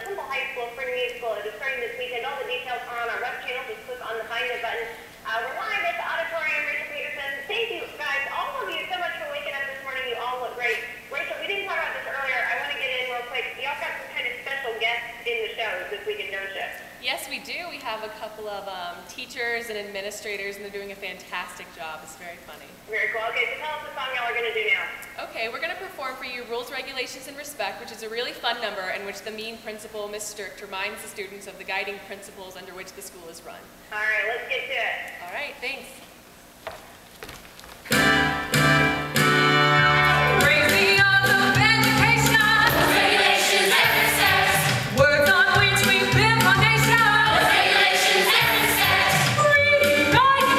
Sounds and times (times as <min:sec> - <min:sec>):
Speech: 0:00.0 - 0:36.0.